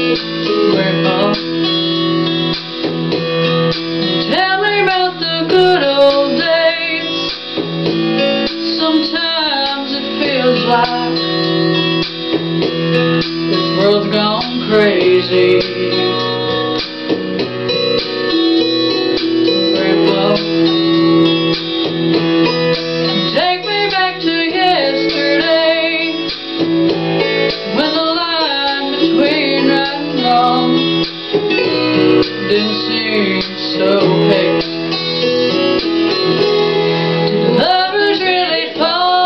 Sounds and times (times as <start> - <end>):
Music: 0.0 - 39.2
Female singing: 0.7 - 1.4, 4.3 - 7.2, 8.7 - 11.2, 13.8 - 16.3, 19.7 - 20.6, 23.2 - 26.3, 27.8 - 31.0, 32.3 - 34.7, 37.5 - 39.2.